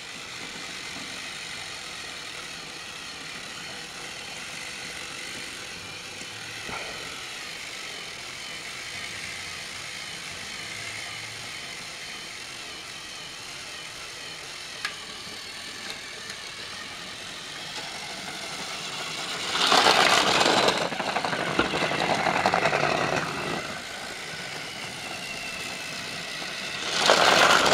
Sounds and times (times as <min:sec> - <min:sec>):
Engine: 0:00.0 - 0:27.7.